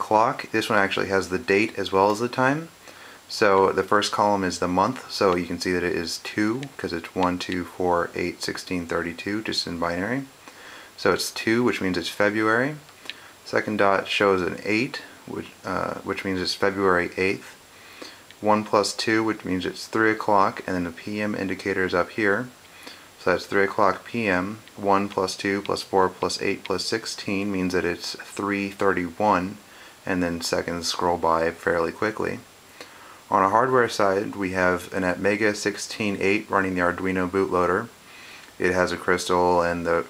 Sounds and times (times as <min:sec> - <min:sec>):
Speech: 0:00.0 - 0:10.4, 0:11.0 - 0:22.6, 0:23.2 - 0:32.6, 0:33.3 - 0:38.0, 0:38.6 - 0:40.0.